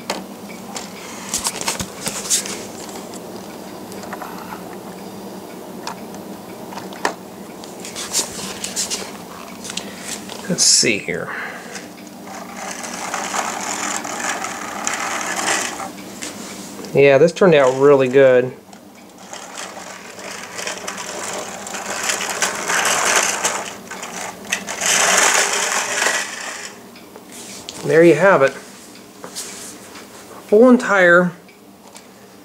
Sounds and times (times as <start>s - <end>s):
Inside, small room: 0.0s - 32.4s
Speech: 10.4s - 11.4s, 16.9s - 18.6s, 27.8s - 28.6s, 30.5s - 31.4s.